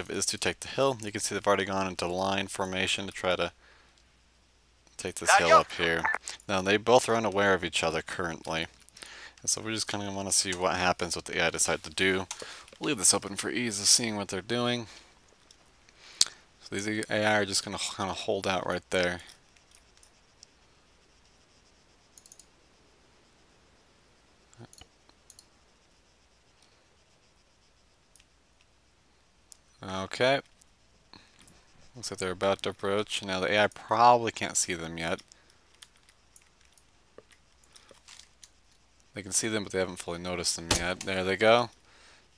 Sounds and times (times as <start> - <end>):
Speech: 0.0 - 3.6, 5.0 - 8.7, 9.4 - 14.9, 16.6 - 19.3, 29.8 - 30.5, 32.0 - 35.2, 39.2 - 41.8.